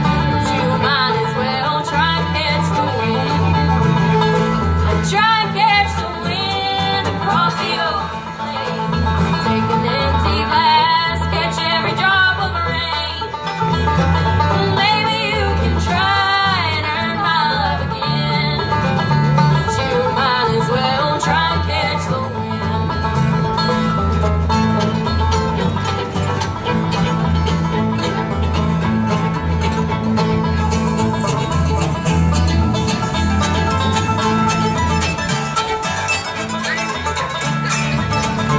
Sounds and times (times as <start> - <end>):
Banjo: 0.0 - 38.5
Country: 0.0 - 38.5
Guitar: 0.0 - 38.5
Violin, fiddle: 0.0 - 38.5.